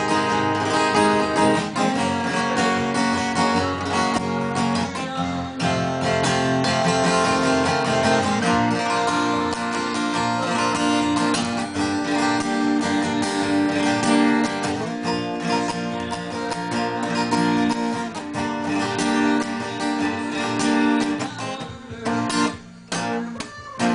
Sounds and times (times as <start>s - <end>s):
Acoustic guitar: 0.0s - 23.9s
Strum: 0.0s - 23.9s.